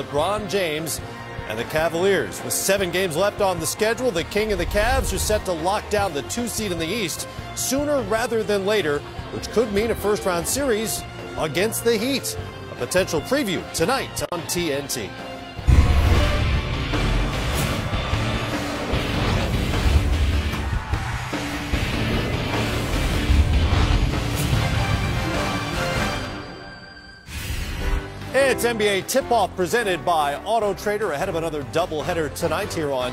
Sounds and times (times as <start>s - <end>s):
Speech: 0.0s - 15.1s, 28.4s - 33.1s
Music: 0.0s - 33.1s.